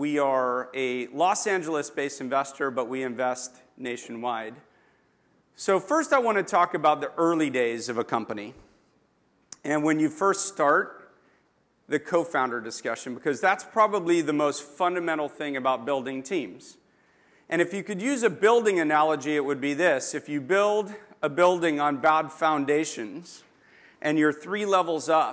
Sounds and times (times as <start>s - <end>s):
Speech: 0.0s - 4.7s, 5.6s - 8.6s, 9.6s - 11.0s, 11.9s - 16.8s, 17.5s - 23.4s, 24.0s - 25.3s.